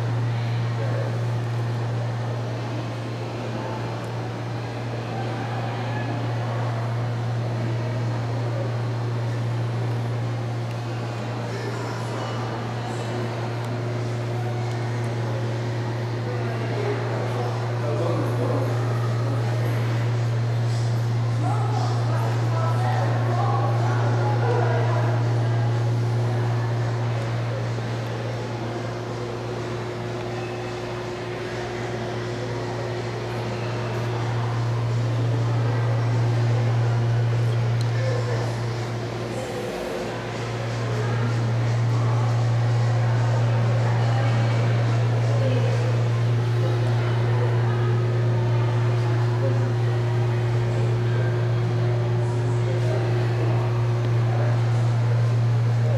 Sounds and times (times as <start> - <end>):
Speech: 0.0 - 55.9.